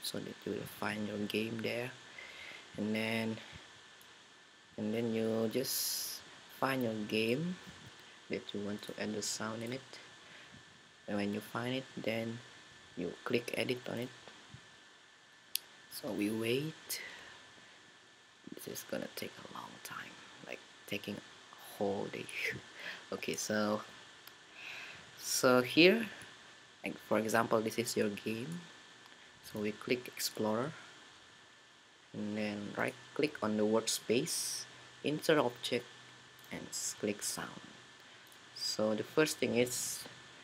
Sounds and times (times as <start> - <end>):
Speech: 0.0 - 2.0, 2.8 - 3.5, 4.8 - 7.7, 8.3 - 10.0, 11.1 - 14.2, 15.9 - 17.1, 18.5 - 23.9, 25.2 - 26.2, 26.8 - 28.7, 29.5 - 30.8, 32.2 - 35.9, 36.5 - 37.7, 38.6 - 40.2.